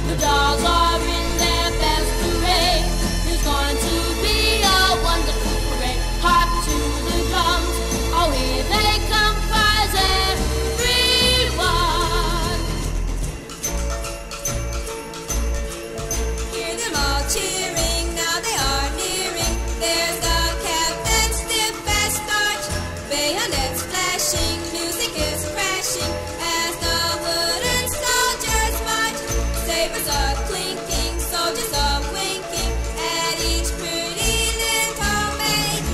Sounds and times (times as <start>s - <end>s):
Music: 0.0s - 35.9s.